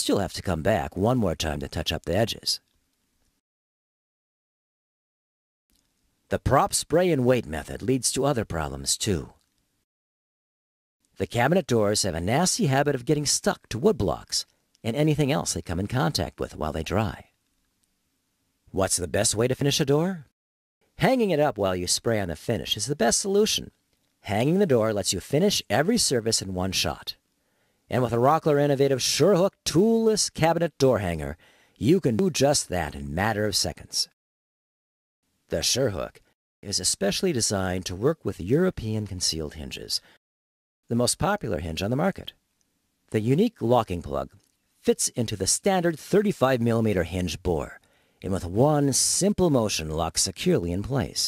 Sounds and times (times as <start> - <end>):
Speech: 0.0 - 2.6, 6.3 - 9.4, 11.2 - 17.3, 18.7 - 20.3, 21.0 - 27.2, 27.9 - 34.2, 35.5 - 40.1, 40.9 - 42.4, 43.1 - 51.2.